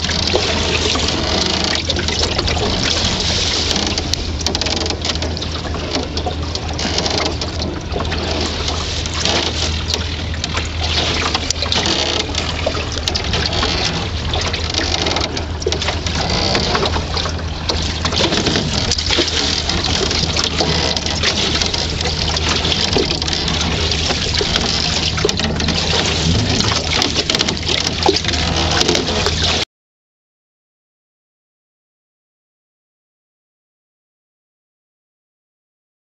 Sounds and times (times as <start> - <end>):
Rowboat, canoe, kayak: 0.0 - 29.7.